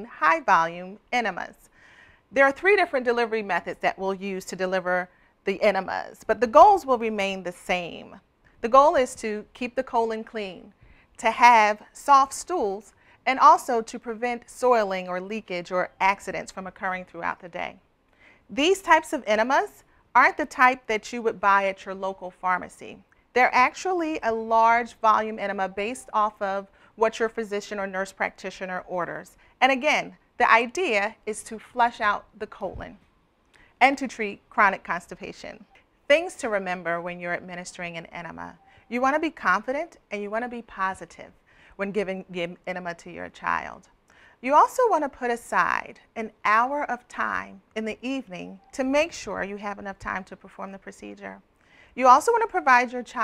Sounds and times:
Speech: 0:00.0 - 0:01.6, 0:02.4 - 0:17.8, 0:18.5 - 0:33.0, 0:33.8 - 0:51.4, 0:52.0 - 0:53.2.

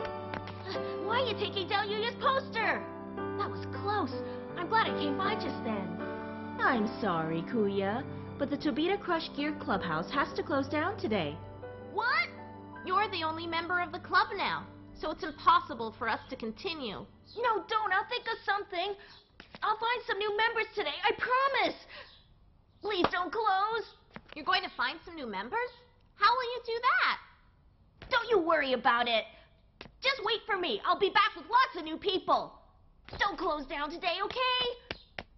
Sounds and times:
Conversation: 0:00.8 - 0:35.0.

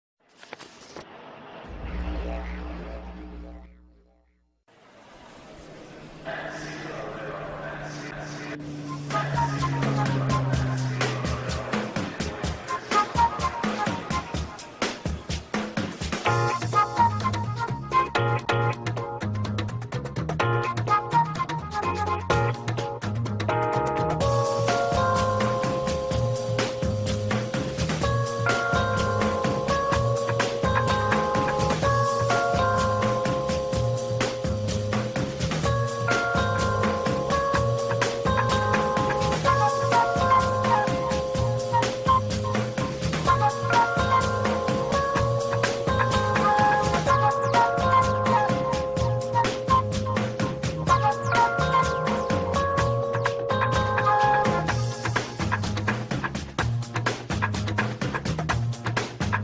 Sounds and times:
Speech: 0:06.2 - 0:12.8
Music: 0:07.3 - 0:59.4.

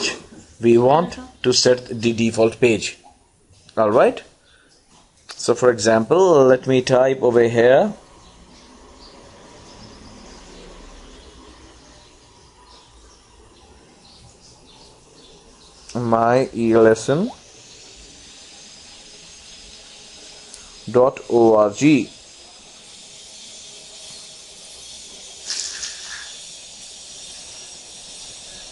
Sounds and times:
Speech: 0:00.0 - 0:03.0, 0:03.7 - 0:04.3, 0:05.4 - 0:08.0, 0:15.9 - 0:17.4, 0:20.9 - 0:22.2.

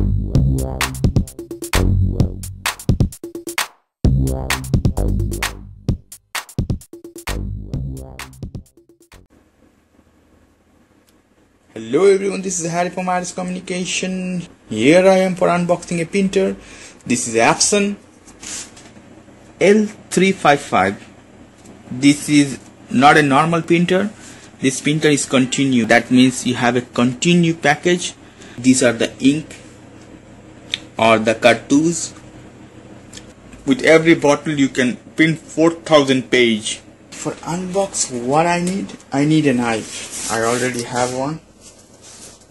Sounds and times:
Speech: 0:11.7 - 0:18.0, 0:19.6 - 0:21.1, 0:21.9 - 0:29.6, 0:31.0 - 0:32.2, 0:33.6 - 0:41.5.

